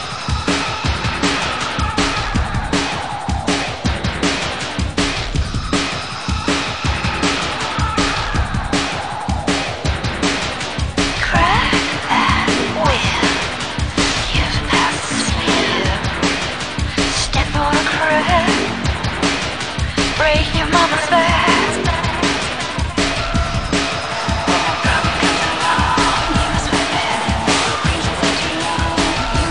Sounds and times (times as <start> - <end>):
Music: 0.0 - 29.5.